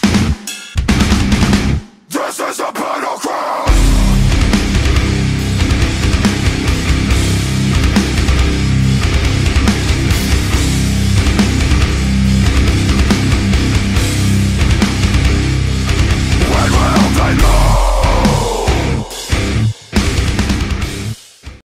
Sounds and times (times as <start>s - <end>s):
Music: 0.0s - 21.6s.